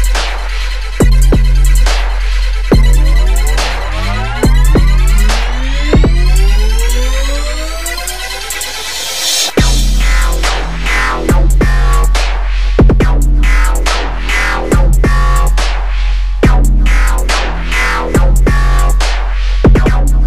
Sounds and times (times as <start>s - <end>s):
Dubstep: 0.0s - 20.2s.